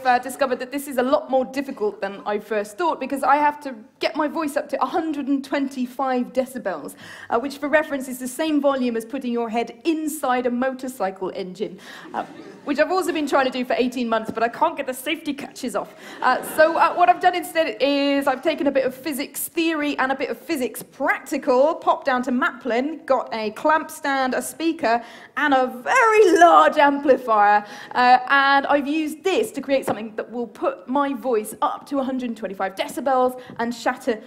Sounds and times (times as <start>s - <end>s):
Speech: 0.0s - 34.2s.